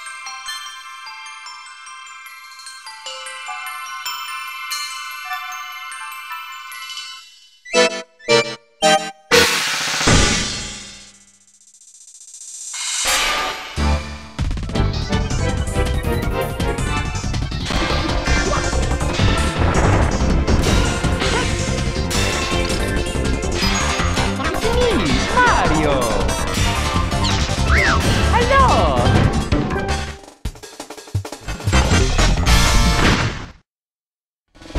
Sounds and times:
Music: 0.0s - 33.1s, 34.6s - 34.7s
Sound effect: 7.0s - 15.4s, 17.1s - 30.1s, 31.4s - 33.6s.

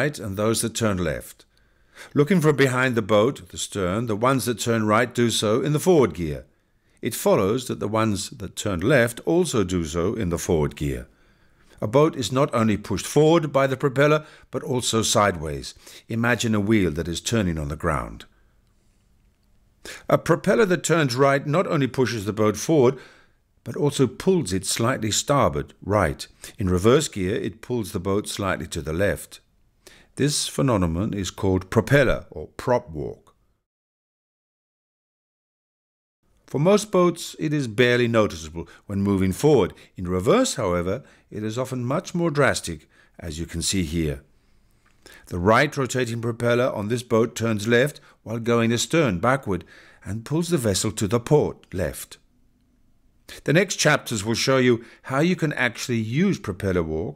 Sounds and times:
Speech: 0.0s - 1.5s, 2.1s - 11.1s, 11.8s - 18.3s, 20.0s - 23.0s, 23.6s - 29.5s, 30.2s - 33.4s, 36.5s - 44.3s, 45.3s - 52.2s, 53.3s - 57.1s.

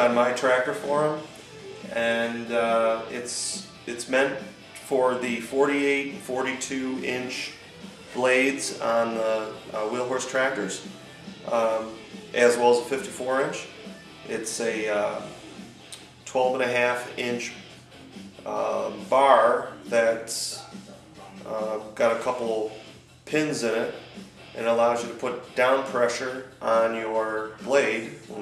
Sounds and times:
Speech: 0.0s - 1.3s, 1.9s - 7.6s, 8.2s - 10.9s, 11.5s - 13.7s, 14.3s - 15.4s, 16.3s - 17.6s, 18.4s - 24.0s, 24.6s - 28.4s
Music: 0.0s - 28.4s.

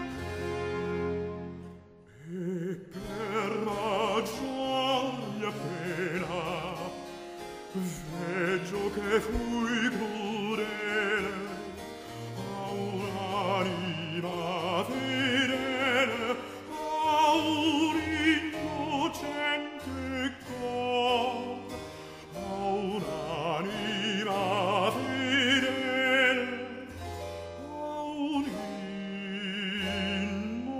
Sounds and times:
Opera: 0.0s - 30.7s.

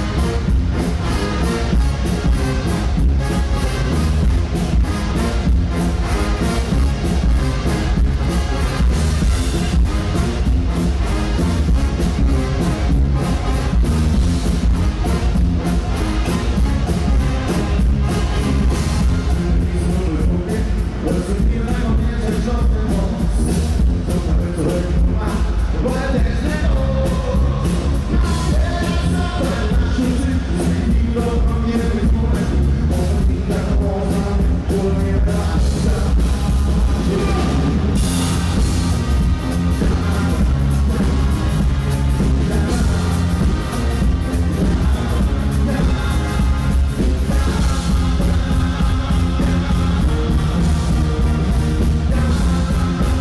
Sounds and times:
Music: 0.0s - 53.2s.

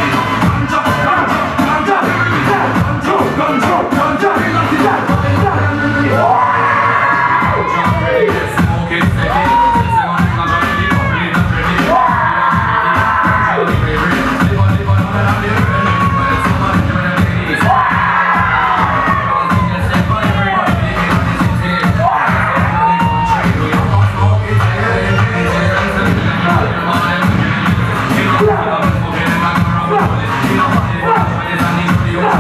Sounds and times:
Music: 0.0s - 32.4s.

